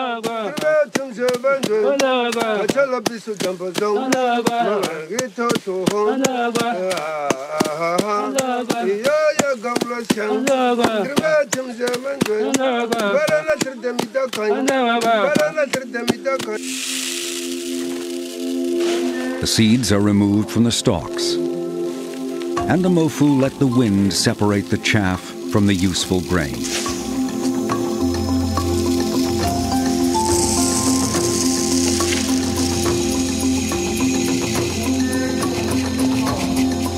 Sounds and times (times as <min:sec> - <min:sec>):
Music: 0:00.0 - 0:36.9.